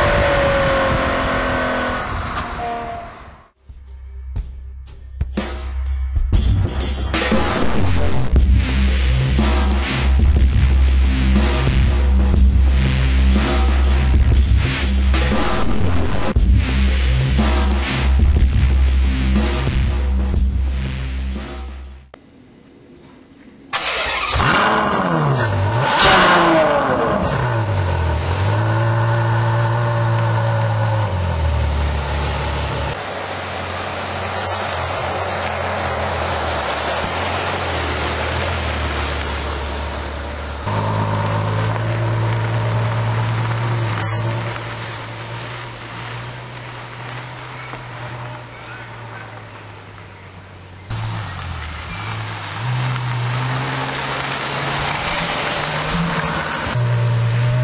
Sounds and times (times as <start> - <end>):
Music: 3.6 - 22.1.